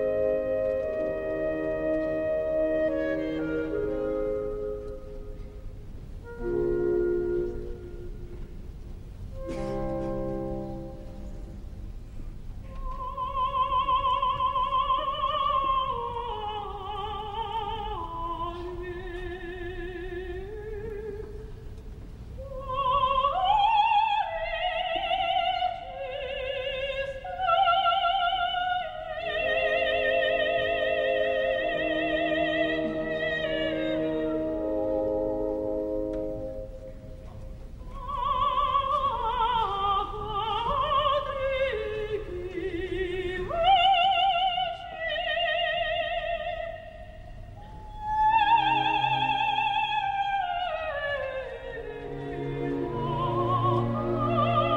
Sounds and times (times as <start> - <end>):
Opera: 0.0 - 54.7.